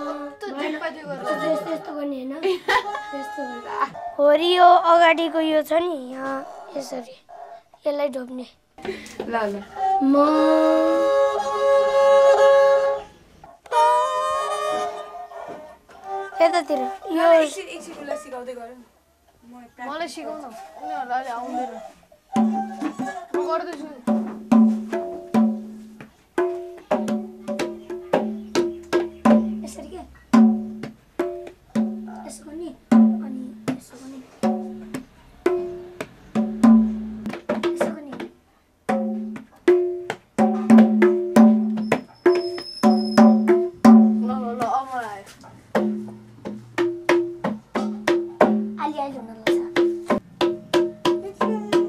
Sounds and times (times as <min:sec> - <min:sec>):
Music: 0:09.8 - 0:18.2, 0:21.5 - 0:32.2, 0:34.4 - 0:38.2, 0:38.9 - 0:44.6, 0:45.8 - 0:51.8.